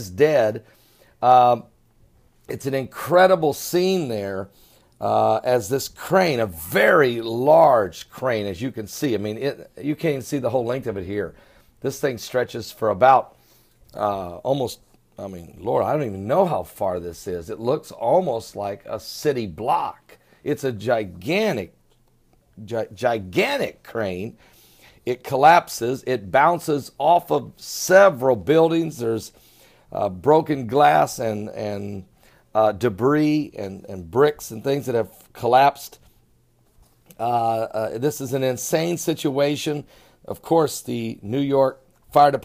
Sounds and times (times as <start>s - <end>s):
Speech: 0.0s - 0.6s, 1.2s - 1.7s, 2.5s - 13.3s, 13.9s - 21.8s, 22.6s - 24.4s, 25.0s - 36.0s, 37.1s - 42.4s.